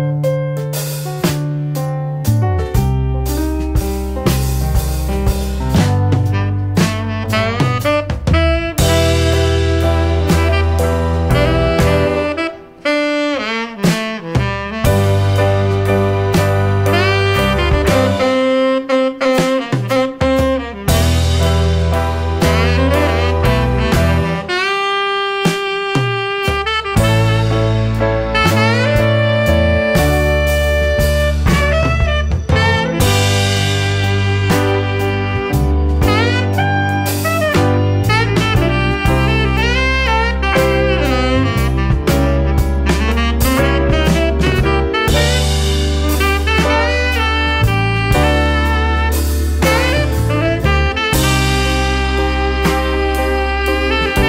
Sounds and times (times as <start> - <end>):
Saxophone: 0.0 - 54.2.